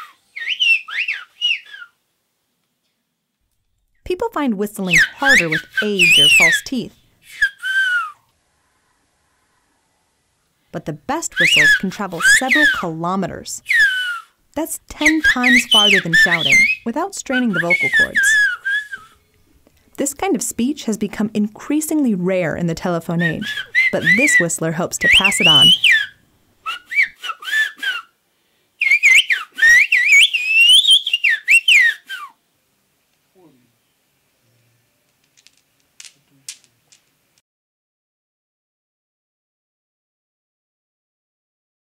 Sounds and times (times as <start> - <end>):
Whistling: 0.0 - 2.0, 4.9 - 8.3, 11.4 - 12.9, 13.6 - 14.4, 15.0 - 19.4, 23.2 - 28.1, 28.8 - 32.4.